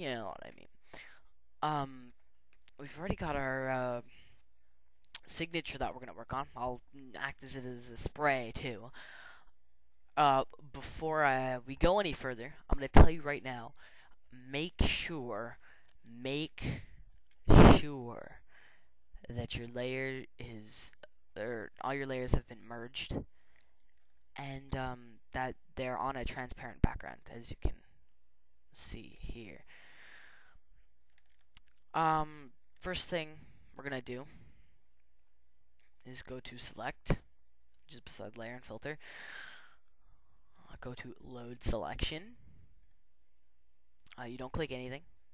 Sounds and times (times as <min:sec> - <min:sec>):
Speech: 0:00.0 - 0:00.8, 0:01.6 - 0:02.2, 0:02.8 - 0:04.2, 0:05.2 - 0:09.0, 0:10.2 - 0:16.9, 0:17.5 - 0:18.4, 0:19.2 - 0:23.3, 0:24.4 - 0:28.0, 0:28.8 - 0:29.7, 0:31.9 - 0:34.5, 0:36.0 - 0:37.3, 0:37.9 - 0:39.0, 0:40.6 - 0:42.4, 0:44.1 - 0:45.1.